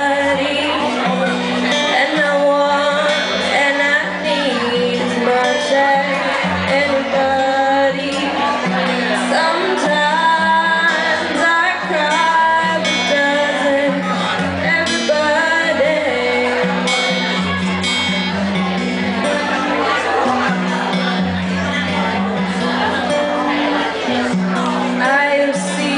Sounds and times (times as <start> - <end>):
Music: 0.0 - 25.9
Speech: 0.0 - 25.9.